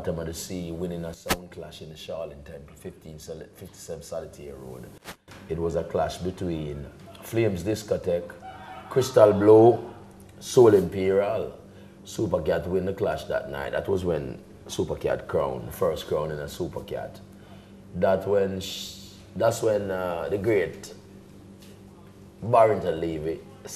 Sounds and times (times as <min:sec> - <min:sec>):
Speech: 0:00.0 - 0:17.3, 0:18.0 - 0:21.0, 0:22.0 - 0:23.7.